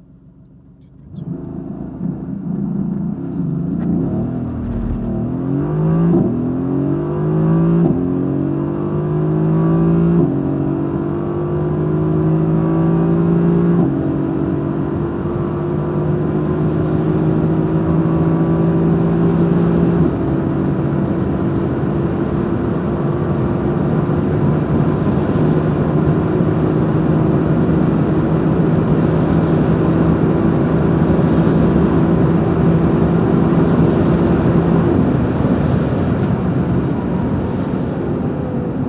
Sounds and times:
Outside, urban or manmade: 0:00.0 - 0:38.8.

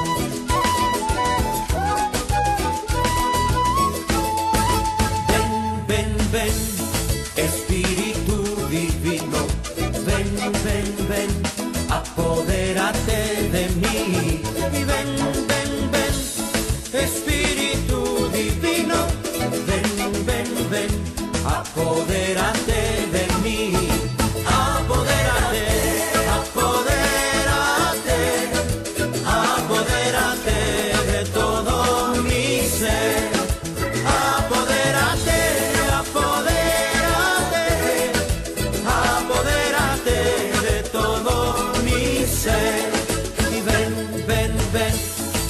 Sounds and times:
Music: 0:00.0 - 0:45.5.

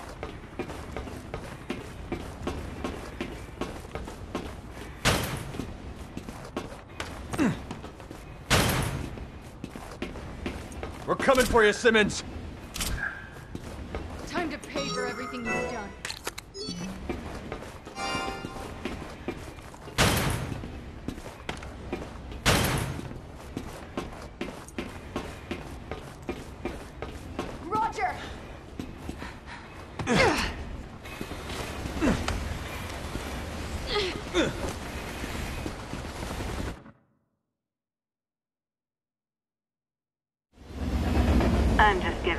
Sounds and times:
Run: 0:00.0 - 0:14.8, 0:16.2 - 0:36.8.

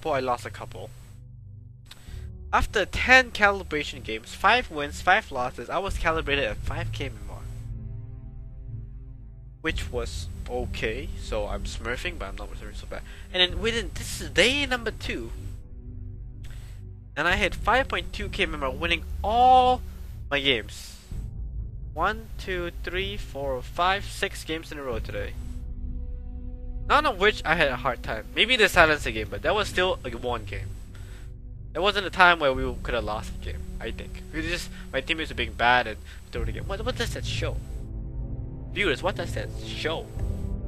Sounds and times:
Male speech, man speaking: 0:00.0 - 0:00.9, 0:02.6 - 0:07.5, 0:09.6 - 0:15.4, 0:17.2 - 0:21.1, 0:22.0 - 0:25.4, 0:26.9 - 0:30.7, 0:31.8 - 0:37.6, 0:38.8 - 0:40.1
Narration, monologue: 0:00.0 - 0:08.2, 0:09.6 - 0:40.6.

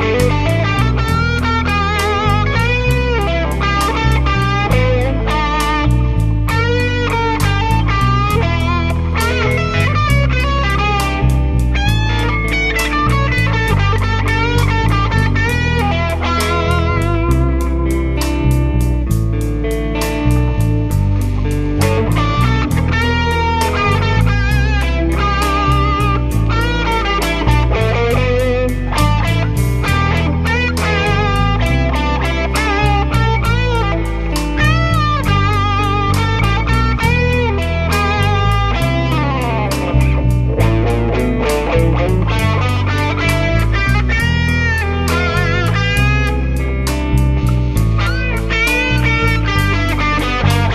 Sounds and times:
Electric guitar: 0:00.0 - 0:50.7.

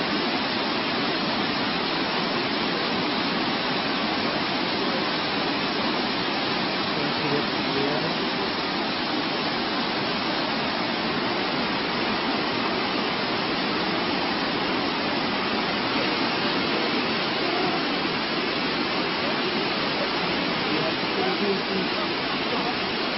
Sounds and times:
Speech: 0:06.9 - 0:08.2, 0:19.2 - 0:23.0.

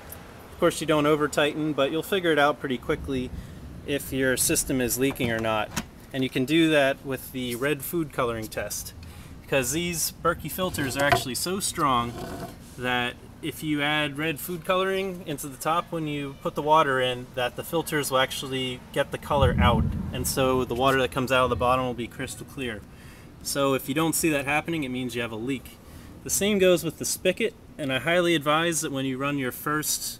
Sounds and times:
Speech: 0:00.6 - 0:03.3, 0:03.9 - 0:12.2, 0:12.8 - 0:30.1.

